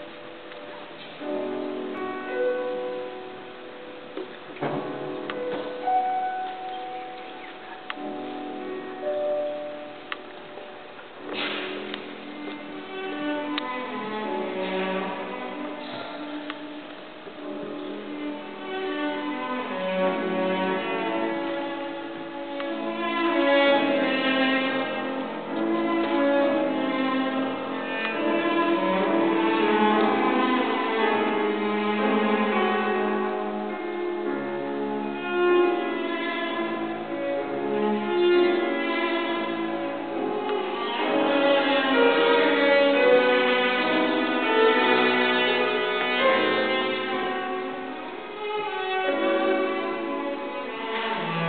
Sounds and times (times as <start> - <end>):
Violin, fiddle: 0.0 - 51.4.